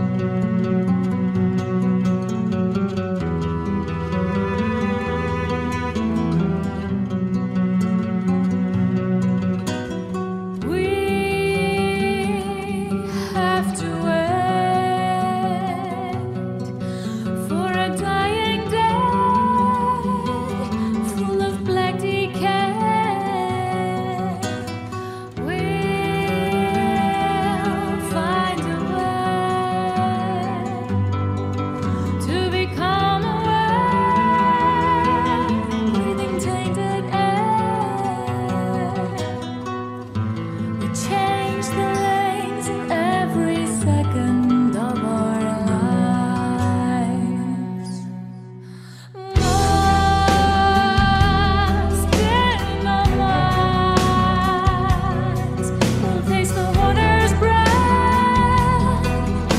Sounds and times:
Music: 0.0s - 59.5s.

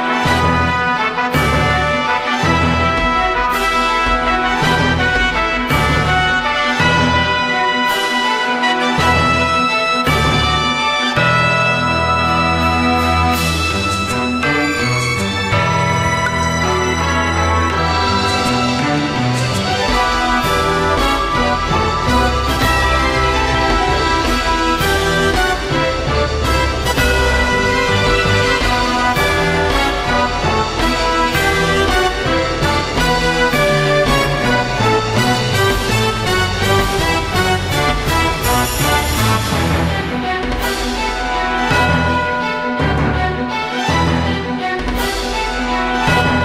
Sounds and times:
Music: 0.0s - 46.4s.

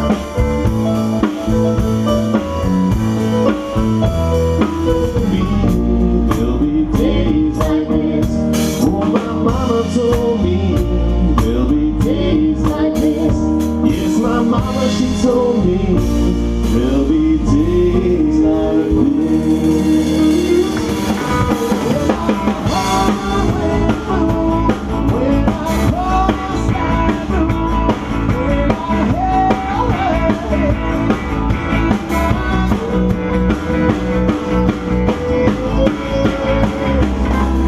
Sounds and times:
Music: 0.0s - 37.6s.

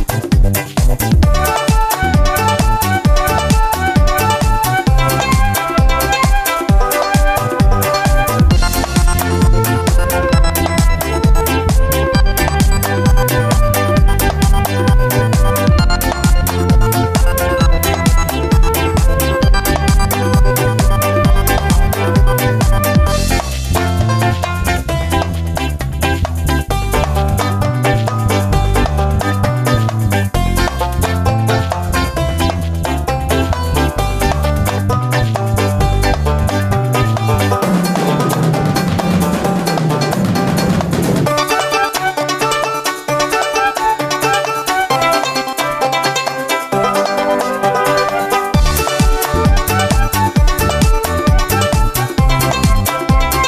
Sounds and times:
Music: 0.0s - 53.4s.

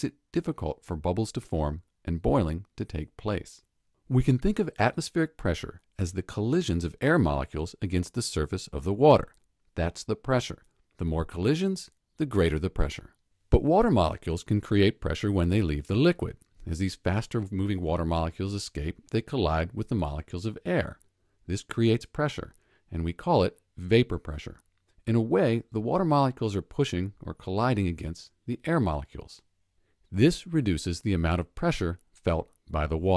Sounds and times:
Speech: 0.0s - 29.5s, 30.1s - 33.1s.

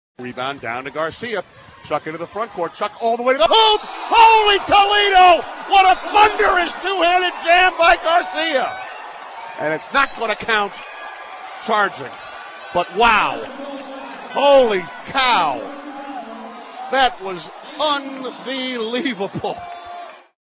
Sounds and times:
Speech: 0.2s - 8.7s, 9.6s - 10.8s, 11.6s - 12.1s, 12.8s - 19.6s.

